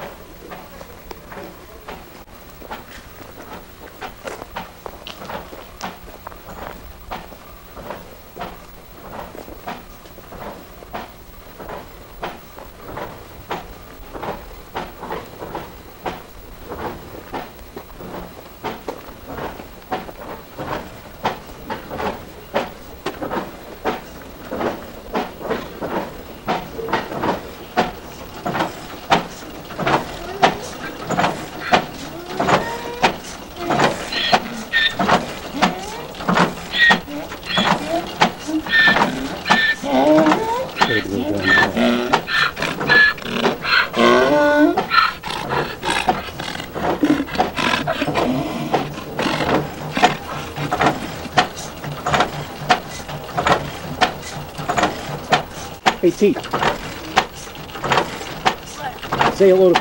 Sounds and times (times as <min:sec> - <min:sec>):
Outside, rural or natural: 0:00.0 - 0:59.8
Speech: 0:00.4 - 0:02.3, 0:39.8 - 0:42.0, 0:56.0 - 0:56.5, 0:58.7 - 0:59.8.